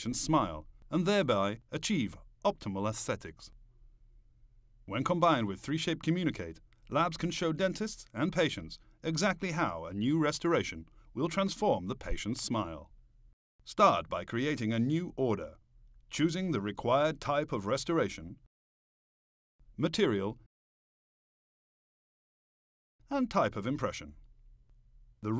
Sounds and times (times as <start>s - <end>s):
Speech: 0.0s - 3.6s, 4.9s - 12.9s, 13.7s - 18.4s, 19.8s - 20.5s, 23.1s - 24.2s.